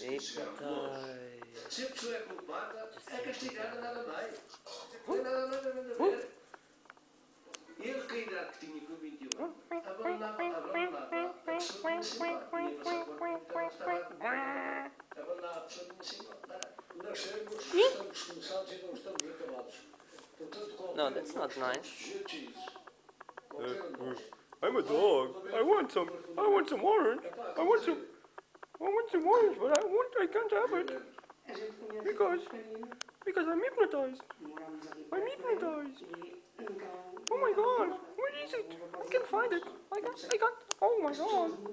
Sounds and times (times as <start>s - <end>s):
Speech: 7.8s - 22.9s, 28.8s - 41.7s.